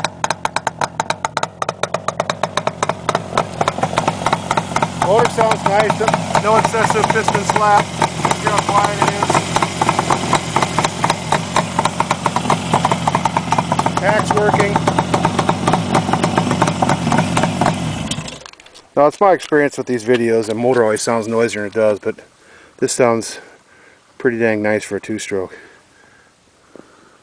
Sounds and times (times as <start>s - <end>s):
Motorcycle: 0.0s - 18.7s
Speech: 5.0s - 9.4s, 14.0s - 14.8s, 19.0s - 23.5s, 24.2s - 25.6s.